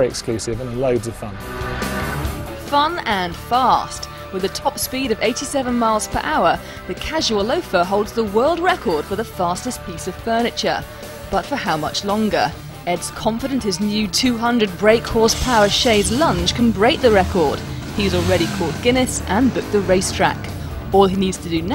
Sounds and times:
Speech: 0:00.0 - 0:01.4, 0:02.7 - 0:21.7
Music: 0:00.0 - 0:21.7.

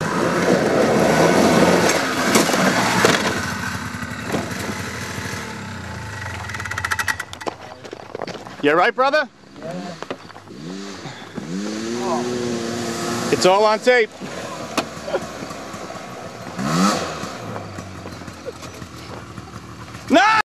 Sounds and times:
Vehicle: 0:00.0 - 0:20.4
Speech: 0:13.3 - 0:14.1.

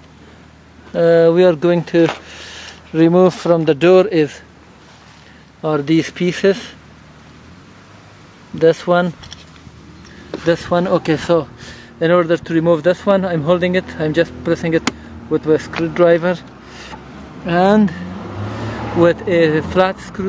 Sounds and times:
Car: 0:00.0 - 0:20.2
Speech: 0:00.9 - 0:02.2, 0:02.9 - 0:04.5, 0:05.6 - 0:06.8, 0:08.5 - 0:09.2, 0:10.4 - 0:16.5, 0:17.5 - 0:18.0, 0:19.0 - 0:20.2.

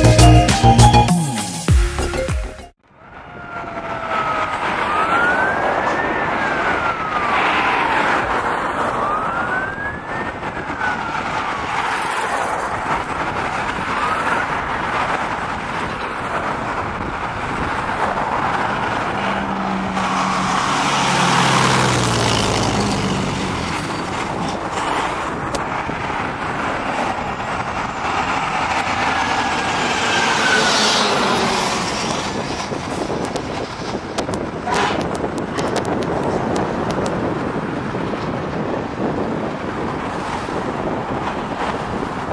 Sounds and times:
Truck: 0:00.0 - 0:42.3
Car: 0:02.8 - 0:42.3.

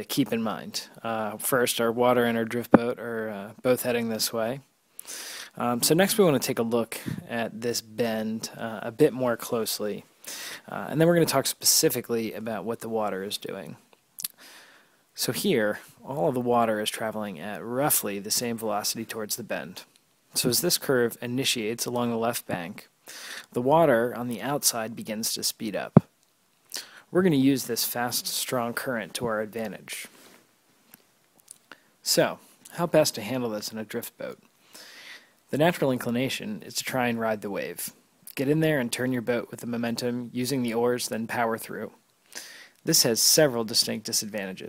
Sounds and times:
Speech: 0:00.0 - 0:04.7, 0:05.6 - 0:10.1, 0:10.7 - 0:13.8, 0:15.2 - 0:22.9, 0:23.5 - 0:26.1, 0:27.1 - 0:30.1, 0:32.0 - 0:34.4, 0:35.5 - 0:42.0, 0:42.8 - 0:44.6.

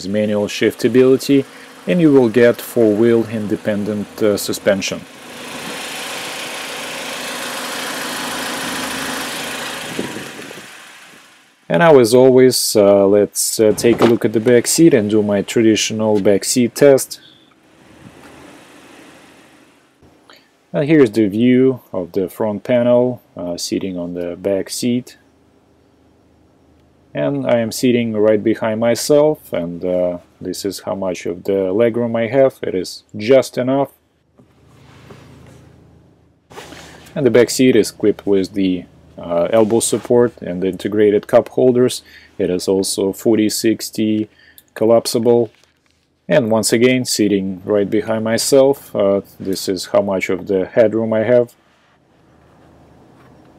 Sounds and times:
Speech: 0:00.0 - 0:05.1, 0:11.7 - 0:17.2, 0:20.8 - 0:25.2, 0:27.2 - 0:34.0, 0:37.2 - 0:45.6, 0:46.3 - 0:51.6
Heavy engine (low frequency): 0:00.0 - 0:11.7, 0:13.6 - 0:20.0
Vehicle: 0:00.0 - 0:32.4, 0:34.2 - 0:43.4, 0:44.0 - 0:53.5
Outside, urban or manmade: 0:00.0 - 0:53.5.

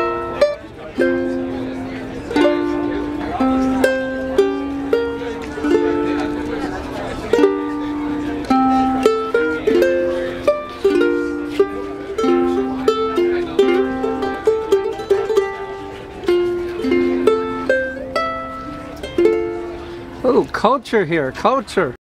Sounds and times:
Music: 0:00.0 - 0:20.4
Speech: 0:00.4 - 0:04.2, 0:04.8 - 0:08.8, 0:20.2 - 0:22.0.

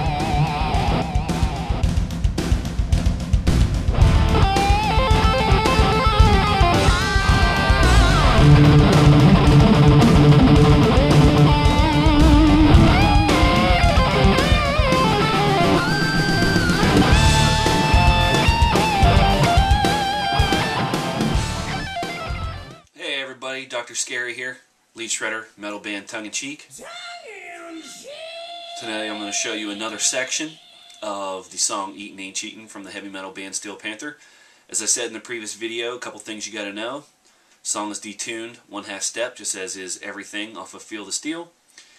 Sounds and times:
Speech: 0:23.0 - 0:41.6.

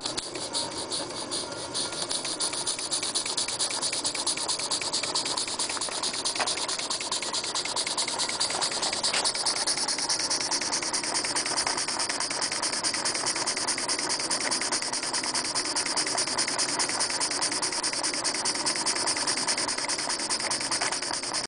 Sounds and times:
Idling: 0:00.0 - 0:21.4.

